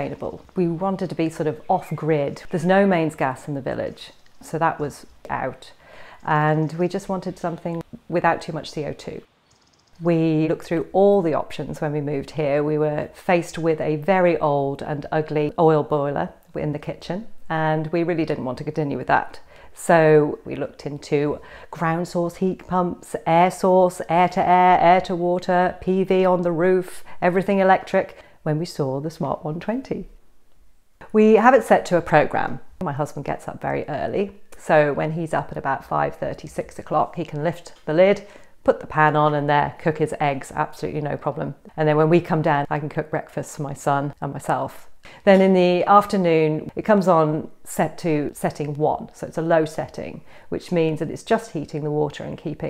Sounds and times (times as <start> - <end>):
Speech: 0.0 - 9.3, 10.0 - 30.1, 31.0 - 52.7.